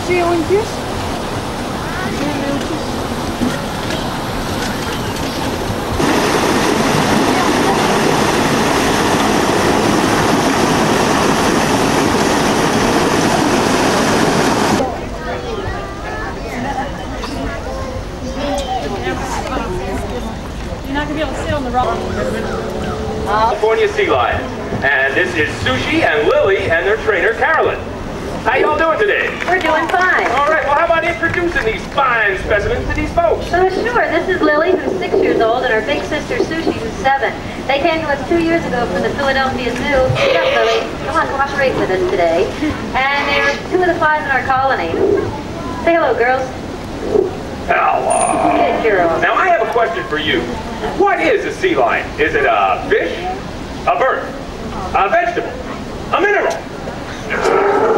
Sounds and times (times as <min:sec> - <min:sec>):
Waterfall: 0:00.0 - 0:57.9.